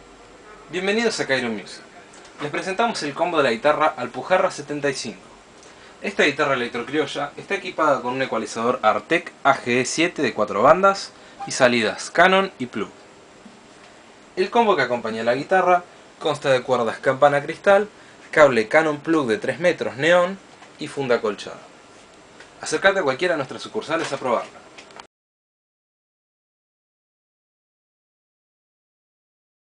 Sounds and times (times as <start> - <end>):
Speech: 0.7 - 5.3, 6.0 - 13.0, 14.4 - 21.7, 22.6 - 24.7.